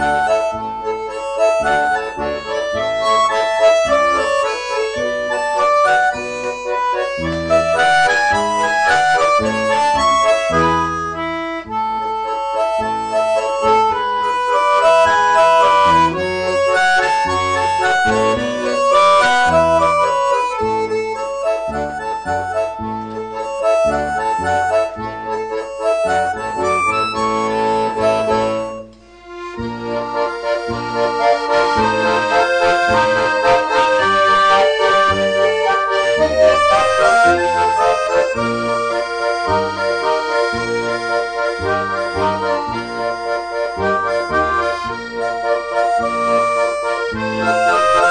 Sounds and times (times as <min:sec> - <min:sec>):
Accordion: 0:00.0 - 0:48.1
Classical music: 0:00.0 - 0:48.1.